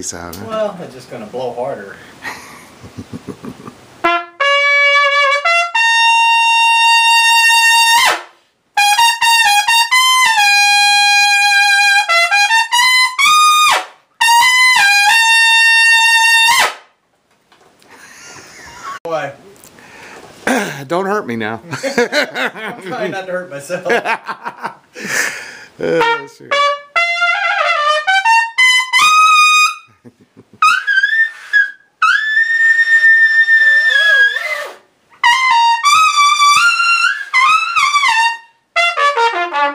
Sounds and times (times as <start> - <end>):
Trumpet: 4.0 - 16.9, 25.8 - 29.9, 30.6 - 39.7.